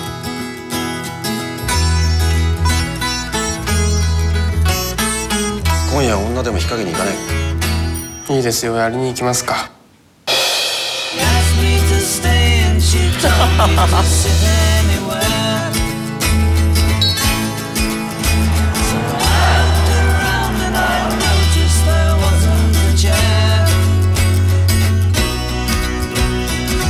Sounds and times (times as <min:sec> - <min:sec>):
Music: 0:00.0 - 0:08.8, 0:10.3 - 0:26.8.